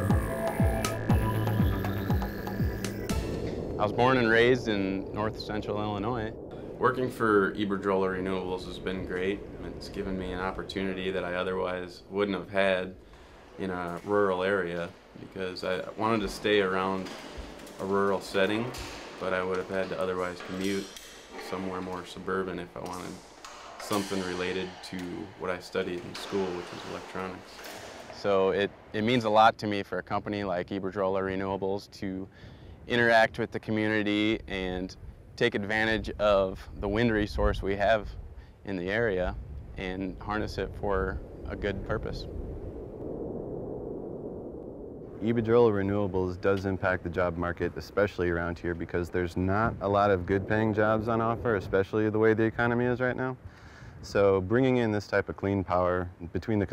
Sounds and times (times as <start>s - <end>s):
Speech: 3.8s - 13.0s, 13.6s - 23.2s, 23.8s - 32.3s, 32.9s - 38.1s, 38.7s - 42.3s, 45.2s - 53.4s, 54.0s - 56.7s.